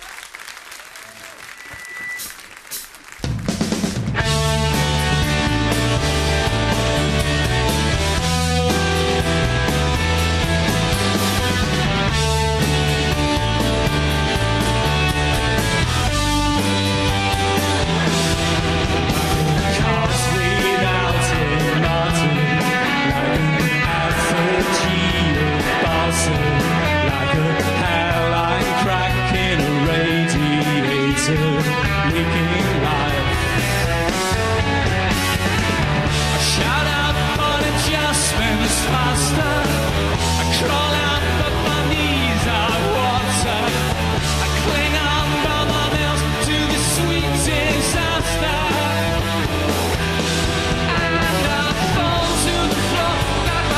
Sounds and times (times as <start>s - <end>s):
Music: 1.6s - 53.7s.